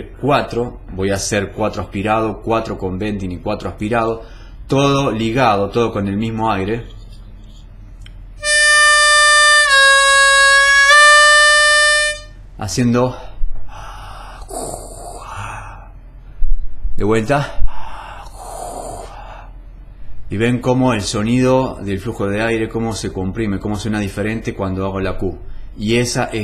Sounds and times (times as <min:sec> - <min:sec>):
Speech: 0:00.0 - 0:07.0, 0:12.6 - 0:13.4, 0:17.0 - 0:17.6, 0:20.3 - 0:26.4
Harmonica: 0:08.4 - 0:12.3.